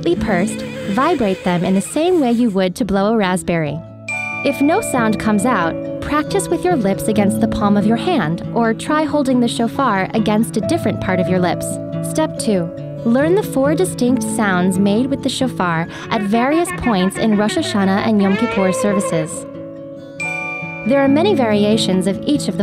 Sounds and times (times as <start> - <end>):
Speech: 0.0 - 3.8, 4.5 - 19.4, 20.9 - 22.6.